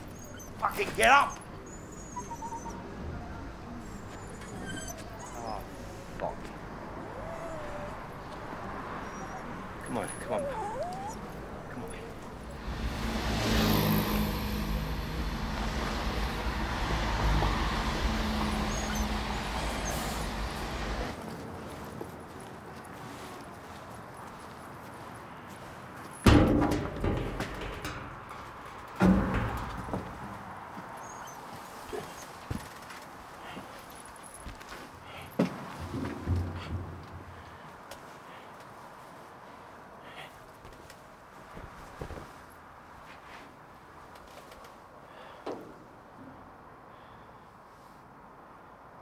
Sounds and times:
Whimper (dog): 0:00.0 - 0:05.8, 0:07.0 - 0:08.3, 0:09.0 - 0:12.1, 0:18.6 - 0:20.2
Speech: 0:00.6 - 0:01.4, 0:09.8 - 0:10.7
Yip: 0:10.4 - 0:11.2.

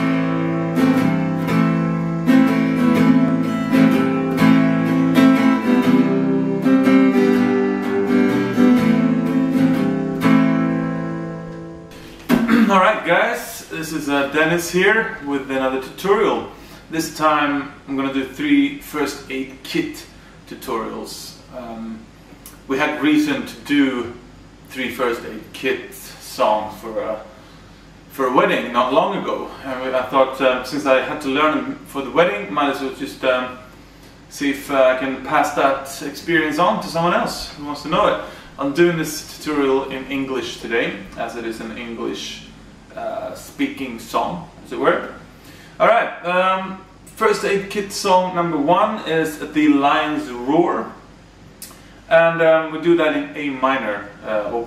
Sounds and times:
Speech: 0:12.5 - 0:27.4, 0:28.1 - 0:33.7, 0:34.3 - 0:45.2, 0:45.8 - 0:51.0, 0:52.1 - 0:54.6.

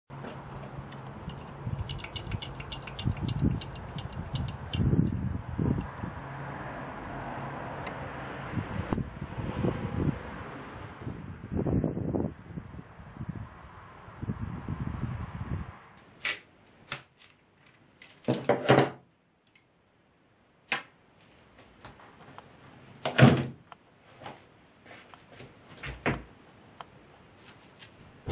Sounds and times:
Tools: 0:00.9 - 0:04.9.

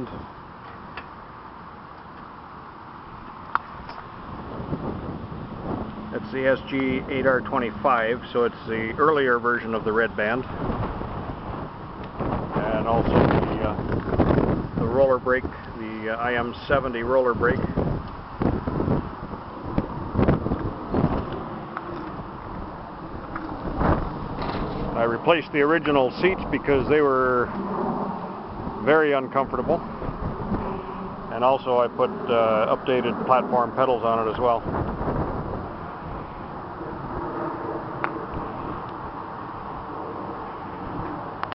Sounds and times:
Speech: 0:06.1 - 0:10.5, 0:12.5 - 0:13.8, 0:14.8 - 0:17.8, 0:25.0 - 0:27.5, 0:28.8 - 0:29.8, 0:31.3 - 0:34.7.

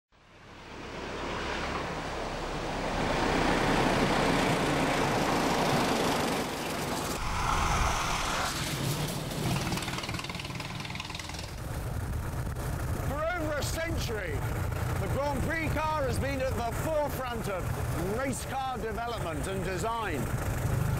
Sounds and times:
Car: 0:00.1 - 0:20.9.

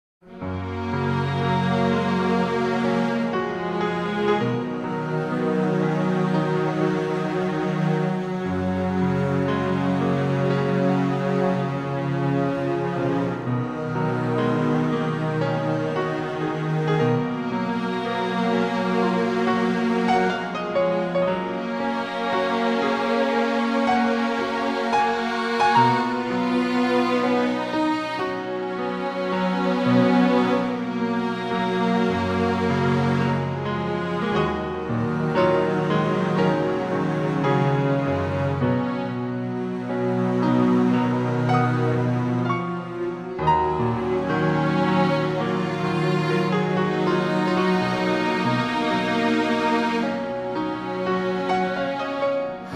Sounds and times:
Tender music: 0:00.3 - 0:52.7.

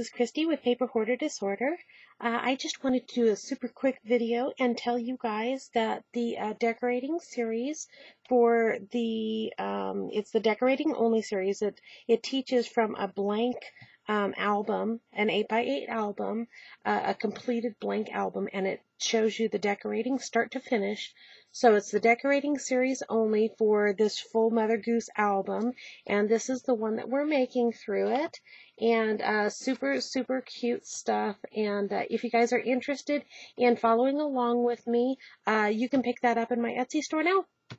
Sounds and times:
Speech: 0:00.0 - 0:37.5.

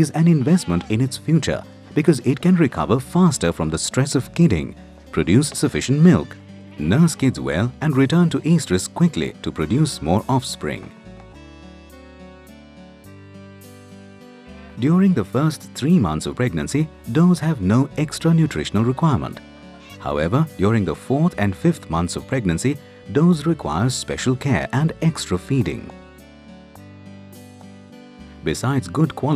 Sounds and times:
Speech: 0:00.0 - 0:10.9, 0:14.6 - 0:26.0, 0:28.4 - 0:29.3
Music: 0:00.0 - 0:29.3.

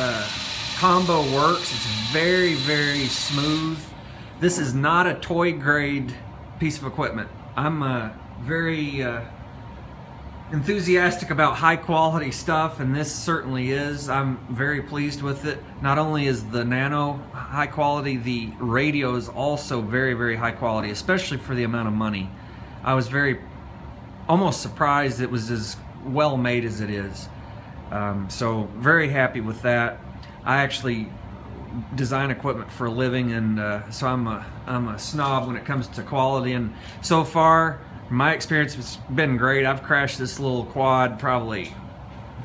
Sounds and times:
Speech: 0:00.0 - 0:09.3, 0:10.5 - 0:23.5, 0:24.3 - 0:27.3, 0:27.9 - 0:41.8.

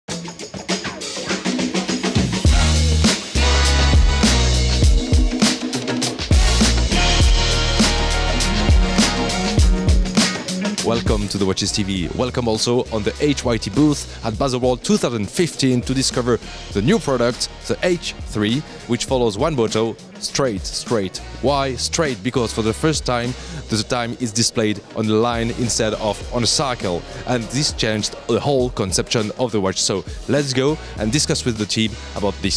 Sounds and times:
Music: 0:00.1 - 0:32.5.

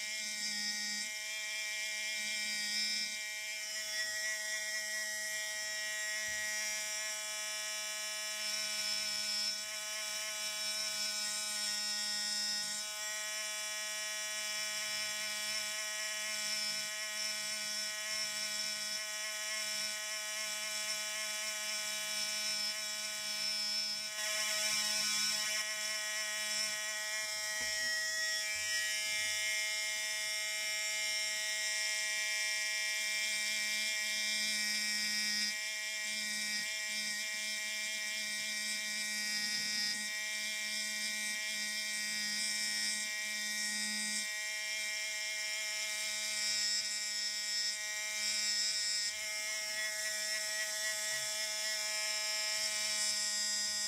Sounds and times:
Electric toothbrush: 0:00.0 - 0:53.8
Inside, small room: 0:00.0 - 0:53.8.

